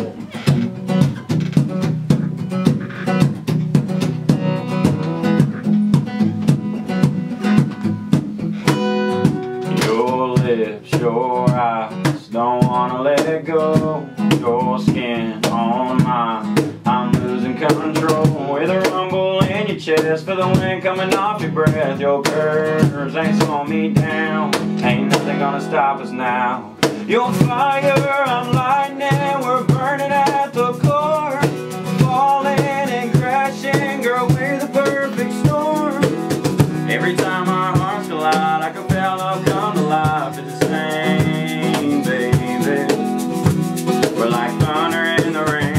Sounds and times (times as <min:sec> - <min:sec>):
Music: 0:00.0 - 0:45.7.